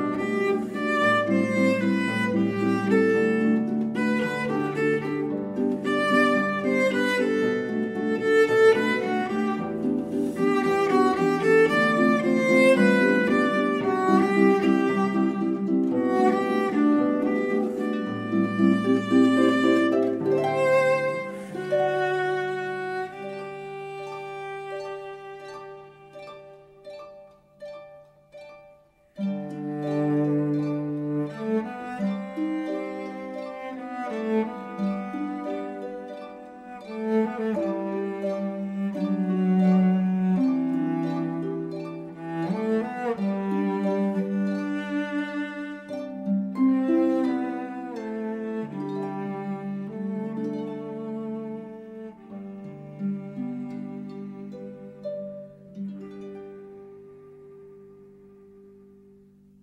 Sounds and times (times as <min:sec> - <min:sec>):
Cello: 0:00.0 - 0:59.6.